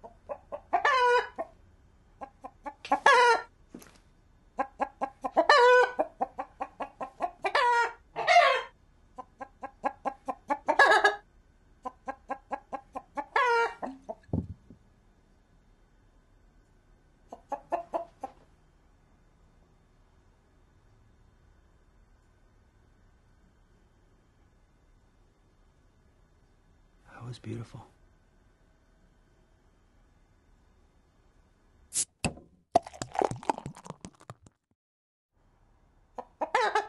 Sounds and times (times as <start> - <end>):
Cluck: 0.0 - 1.6, 2.2 - 3.5, 4.6 - 11.2, 11.8 - 14.3, 17.3 - 18.4, 36.2 - 36.8.